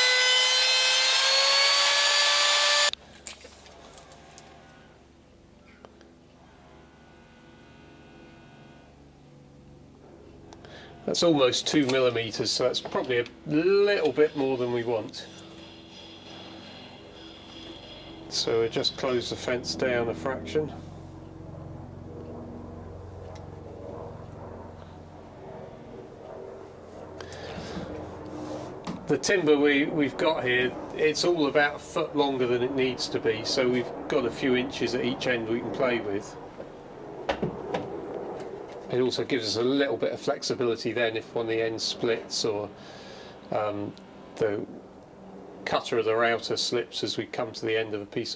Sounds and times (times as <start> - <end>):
Speech: 11.1 - 15.4, 18.3 - 20.8, 29.1 - 36.4, 38.9 - 42.8, 43.5 - 44.7, 45.7 - 48.3.